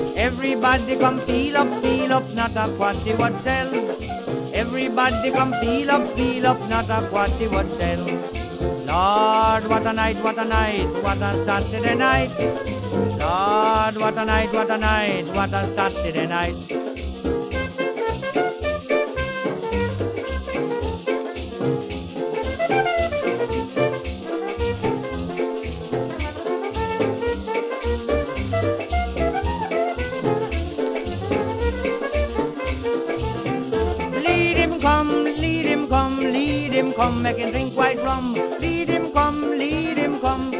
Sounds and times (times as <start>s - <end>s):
Orchestra: 0.0s - 40.5s.